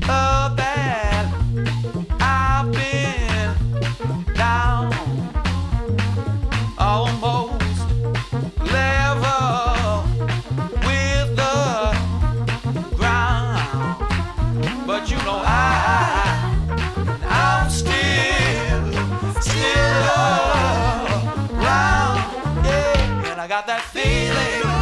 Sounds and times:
Music: 0.0s - 24.8s.

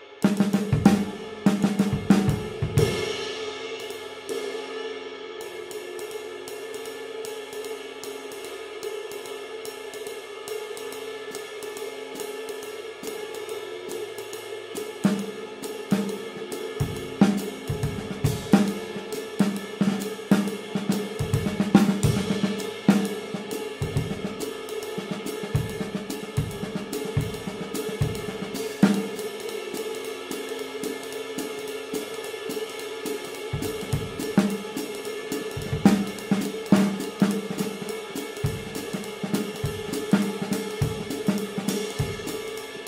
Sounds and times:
Snare drum: 0.3s - 3.3s, 16.8s - 29.3s, 32.5s - 42.8s
Hi-hat: 5.5s - 42.8s.

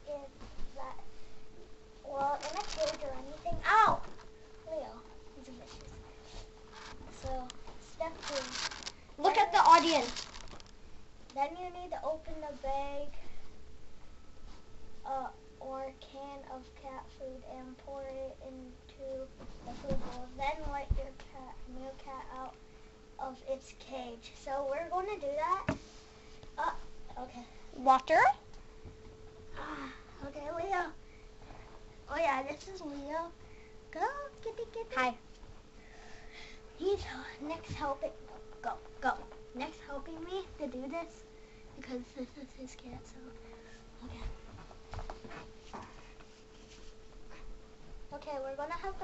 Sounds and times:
Speech: 0.0s - 1.0s, 2.0s - 4.0s, 4.7s - 6.0s, 7.1s - 8.6s, 9.2s - 10.2s, 11.3s - 13.2s, 15.1s - 22.6s, 23.2s - 25.7s, 26.6s - 28.4s, 29.6s - 31.0s, 32.1s - 35.2s, 36.8s - 41.2s, 41.8s - 43.4s, 44.0s - 44.4s, 48.1s - 49.0s.

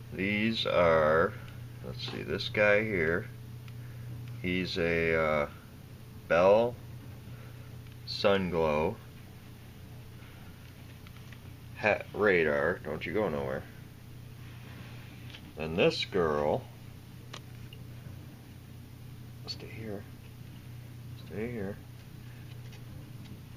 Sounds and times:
Speech: 0.1s - 3.4s, 4.4s - 5.6s, 6.3s - 6.8s, 8.1s - 9.0s, 11.8s - 13.8s, 15.6s - 16.7s, 19.4s - 20.1s, 21.2s - 21.8s.

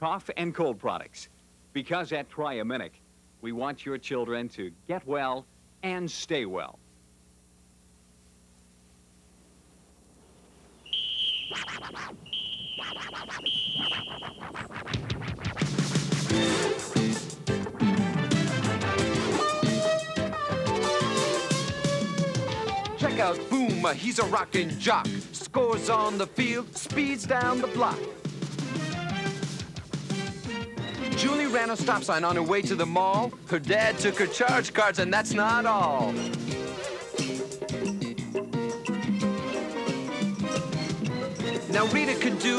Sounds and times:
Music: 12.9s - 42.5s.

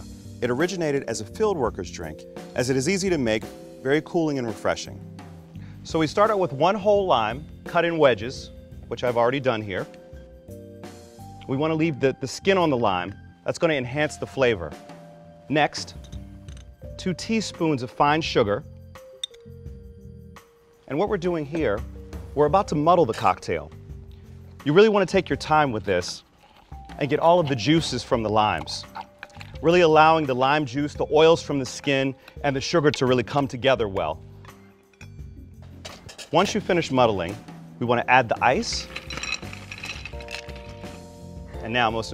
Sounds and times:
Music: 0.0s - 42.1s
Speech: 0.4s - 5.0s, 5.9s - 9.9s, 11.5s - 14.8s, 15.5s - 16.0s, 17.0s - 18.6s, 20.9s - 21.8s, 22.4s - 23.7s, 24.6s - 26.2s, 27.0s - 29.0s, 29.6s - 34.2s, 36.3s - 38.9s, 41.6s - 42.1s.

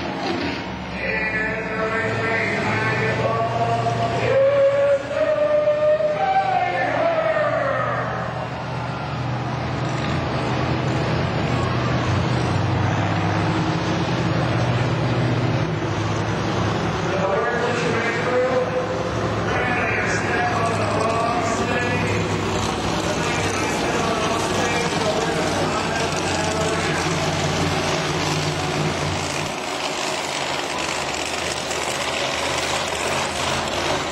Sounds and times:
Truck: 0.0s - 34.1s.

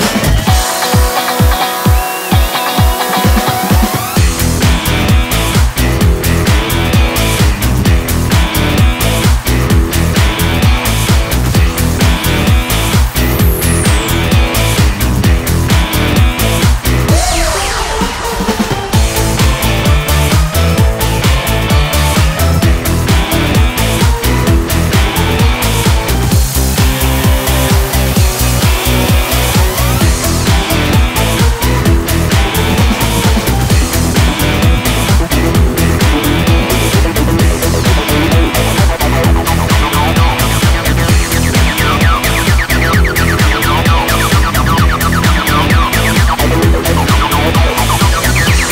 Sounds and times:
Music: 0.0s - 48.7s.

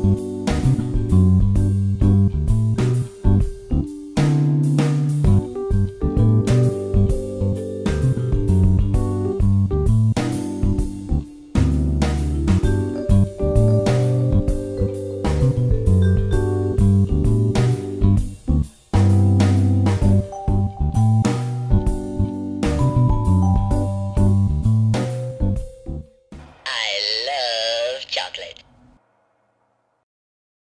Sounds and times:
Guitar: 0.0s - 28.6s
Speech: 26.7s - 28.6s.

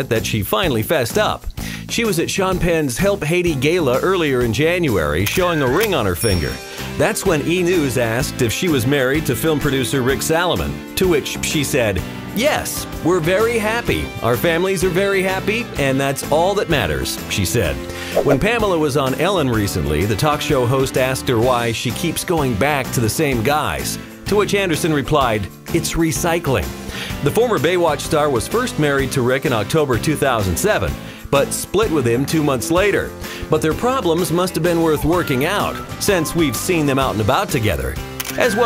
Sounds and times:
Music: 0.0s - 38.6s
Speech: 0.0s - 38.6s.

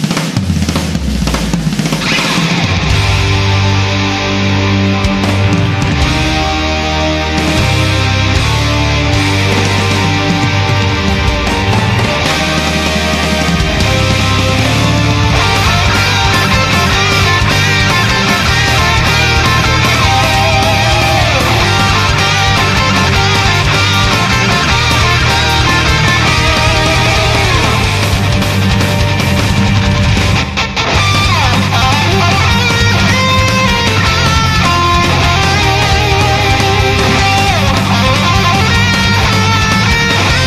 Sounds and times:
Music: 0.0s - 40.4s.

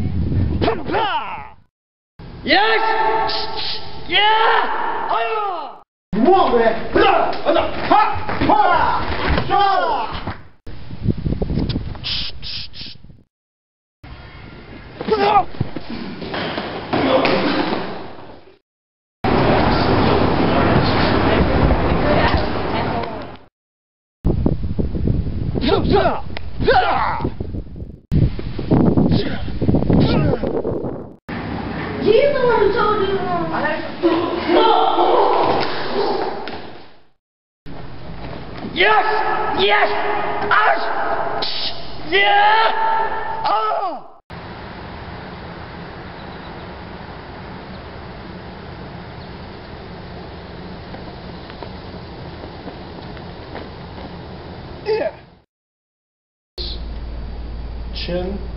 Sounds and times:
Outside, rural or natural: 0.0s - 5.0s, 9.5s - 13.3s, 14.1s - 18.6s, 24.3s - 32.4s, 42.8s - 55.4s
Speech: 2.5s - 3.2s, 5.1s - 10.2s, 25.6s - 27.2s, 32.0s - 35.4s, 54.9s - 55.2s, 58.0s - 58.5s.

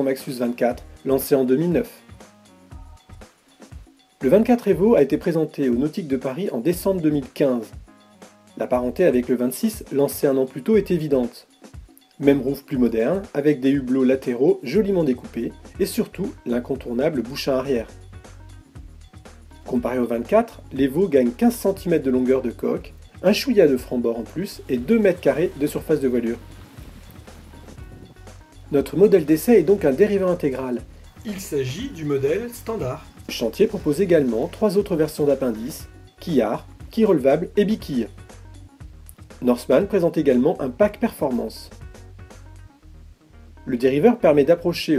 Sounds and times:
Speech: 0.0s - 2.1s, 4.2s - 7.8s, 8.6s - 11.5s, 12.2s - 17.9s, 19.7s - 26.5s, 28.7s - 38.2s, 39.4s - 41.8s, 43.7s - 44.9s
Music: 0.0s - 44.9s.

